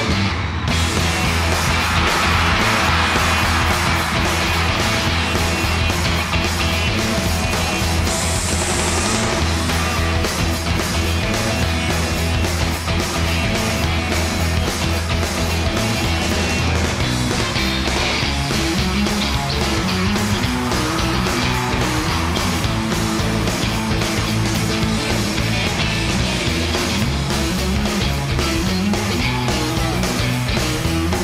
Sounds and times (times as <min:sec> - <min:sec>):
Music: 0:00.0 - 0:31.2.